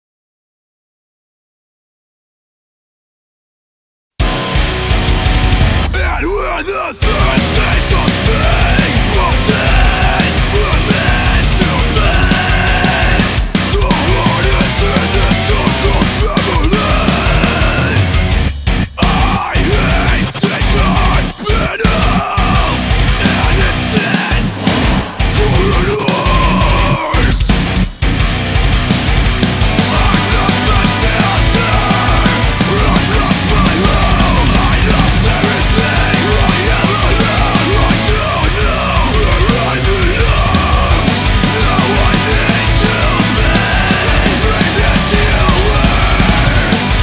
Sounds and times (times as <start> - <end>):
Music: 4.2 - 47.0.